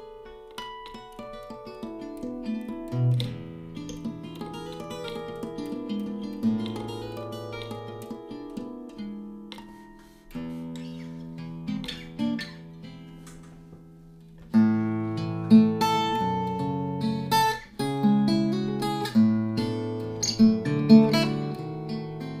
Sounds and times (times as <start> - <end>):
Strum: 2.0 - 22.4.